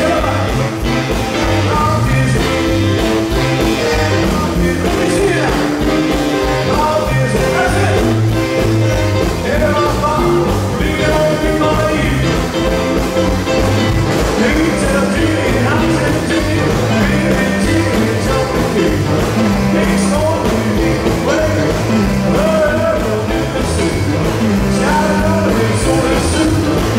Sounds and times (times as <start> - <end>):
Rock and roll: 0.0 - 26.9
Singing: 14.3 - 26.9.